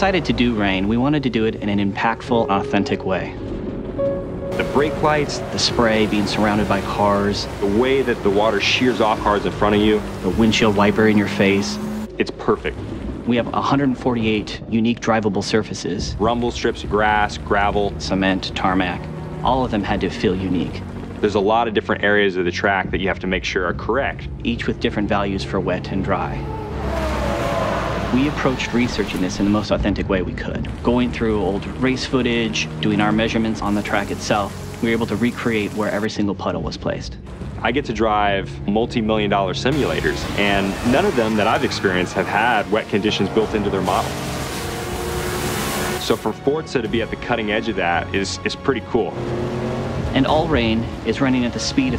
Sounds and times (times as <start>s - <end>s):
Speech: 0.0s - 3.4s, 4.6s - 26.5s, 28.1s - 44.2s, 46.0s - 49.2s, 50.1s - 51.9s
Music: 0.0s - 51.9s.